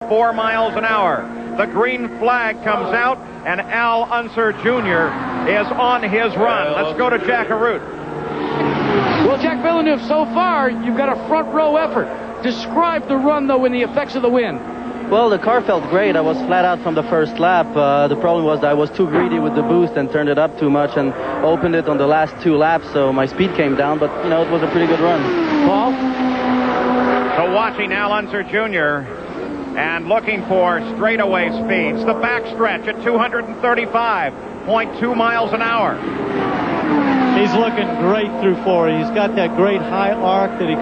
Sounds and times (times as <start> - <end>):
Speech: 0.0 - 7.8, 9.2 - 26.0, 27.4 - 29.1, 29.8 - 36.0, 37.3 - 40.8.